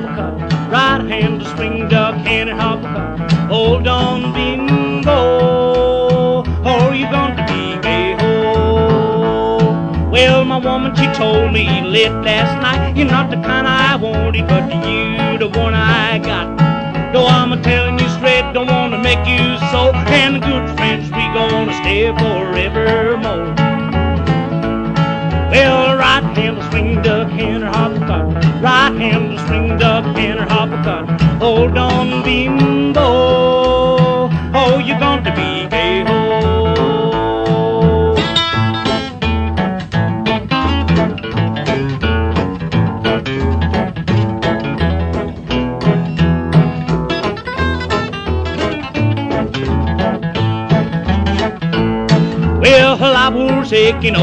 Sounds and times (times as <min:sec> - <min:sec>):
Music: 0:00.0 - 0:54.2.